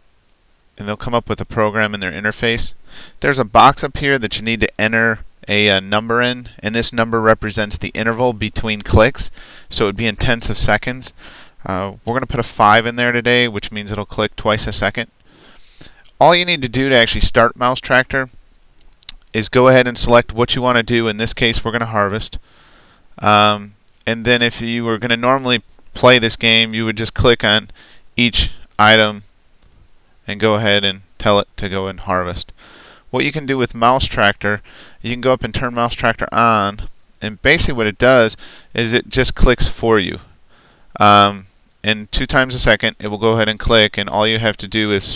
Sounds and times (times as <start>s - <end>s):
Speech: 0.8s - 15.1s, 16.2s - 18.4s, 19.3s - 22.4s, 23.2s - 29.3s, 30.3s - 32.5s, 33.1s - 40.3s, 41.0s - 45.1s.